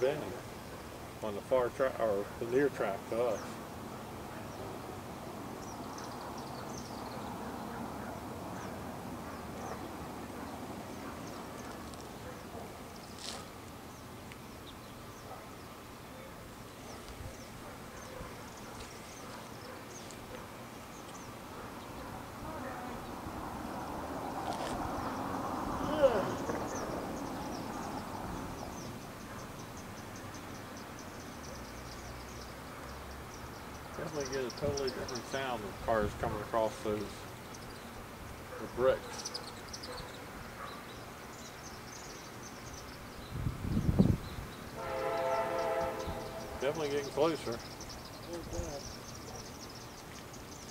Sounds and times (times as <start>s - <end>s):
Outside, rural or natural: 0.0s - 50.7s
Speech: 1.2s - 3.5s, 34.0s - 37.2s, 38.6s - 39.2s, 46.6s - 47.6s, 48.3s - 48.9s
Railroad car, train wagon: 44.7s - 46.8s
Train: 44.8s - 46.6s.